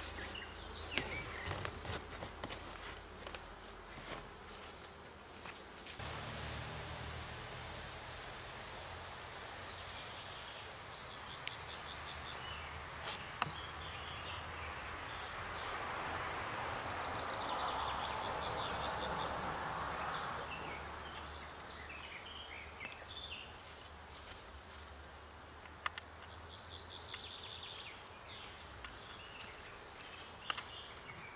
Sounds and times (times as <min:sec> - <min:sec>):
Environmental noise: 0:00.0 - 0:31.3.